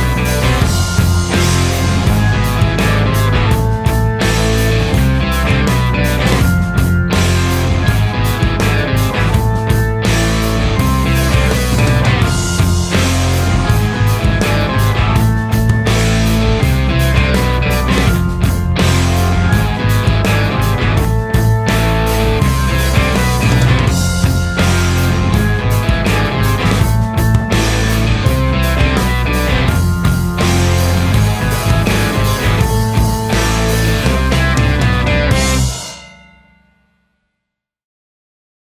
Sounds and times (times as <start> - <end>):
Bass drum: 0.0 - 35.8
Drum kit: 0.0 - 36.2.